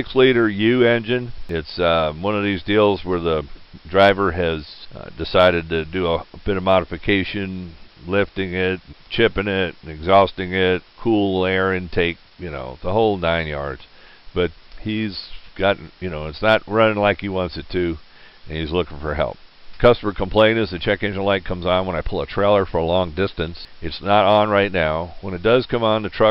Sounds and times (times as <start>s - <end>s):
Speech: 0.0s - 26.3s.